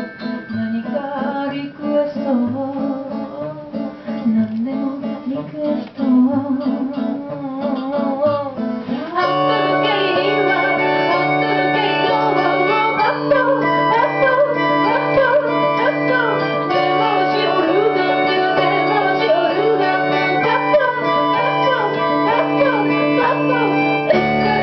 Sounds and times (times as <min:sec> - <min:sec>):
Singing: 0:00.5 - 0:24.6
Accordion: 0:08.5 - 0:24.6
Wedding music: 0:09.2 - 0:24.6.